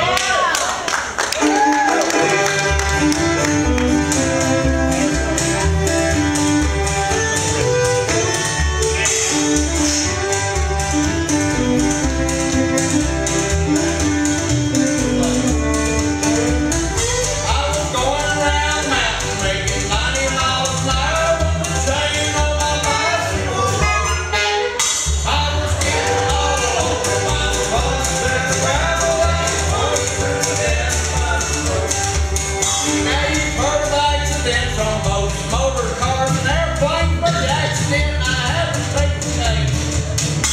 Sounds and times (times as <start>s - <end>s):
Music: 0.9s - 40.5s.